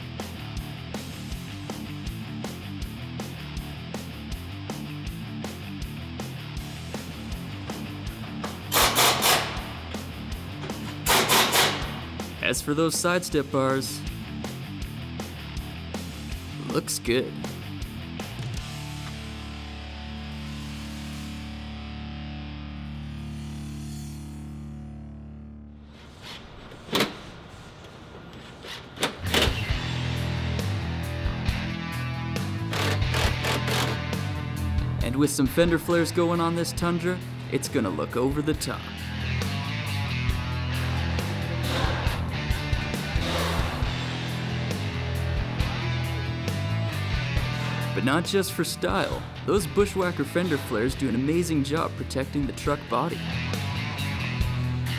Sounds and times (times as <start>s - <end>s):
Music: 0.0s - 26.4s, 29.0s - 54.9s
Speech: 12.4s - 14.0s, 16.6s - 17.4s, 35.0s - 38.9s, 48.0s - 53.2s.